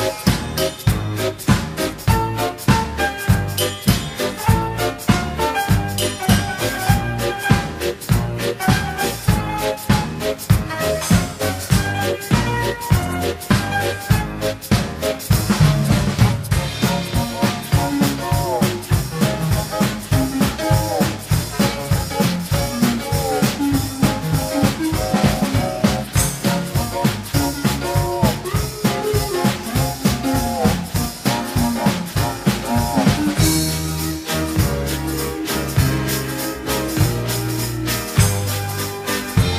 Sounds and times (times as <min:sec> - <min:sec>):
Music: 0:00.0 - 0:39.5.